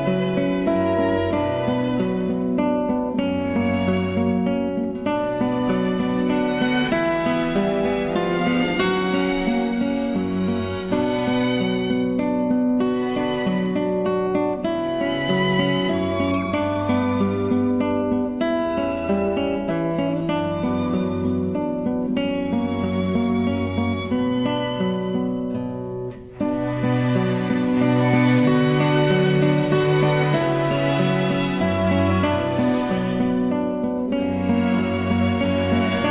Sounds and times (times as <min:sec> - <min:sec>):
Acoustic guitar: 0:00.0 - 0:36.1
Strum: 0:00.0 - 0:36.1.